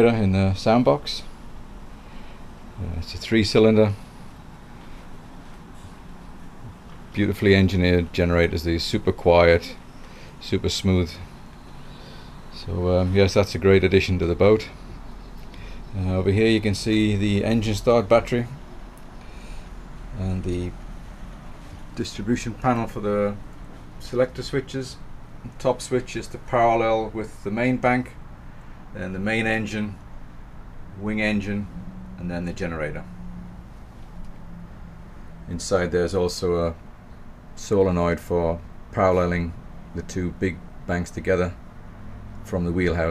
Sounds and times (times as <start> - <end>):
Speech: 0.0 - 1.3, 2.8 - 4.0, 7.1 - 9.8, 10.4 - 11.3, 12.5 - 14.8, 15.9 - 18.6, 20.2 - 20.8, 22.0 - 23.4, 24.0 - 28.2, 29.0 - 30.0, 31.0 - 33.1, 35.5 - 36.8, 37.6 - 41.6, 42.4 - 43.1.